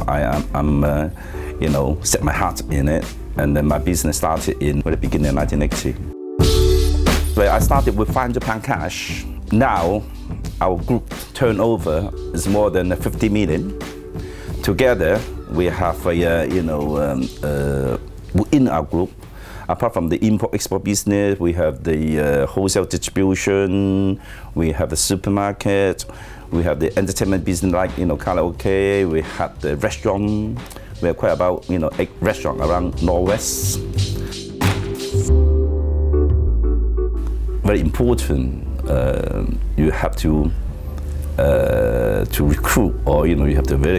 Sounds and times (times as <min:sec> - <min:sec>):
Speech: 0:00.0 - 0:06.1, 0:07.4 - 0:13.8, 0:14.6 - 0:19.1, 0:19.7 - 0:33.9, 0:37.6 - 0:40.6, 0:41.4 - 0:43.9
Music: 0:00.0 - 0:43.9.